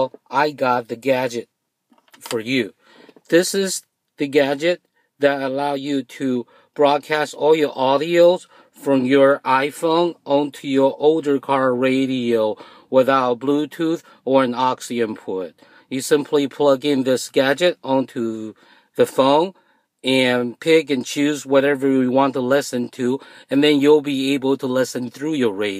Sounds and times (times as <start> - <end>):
Speech: 0.0 - 1.5, 2.2 - 25.7.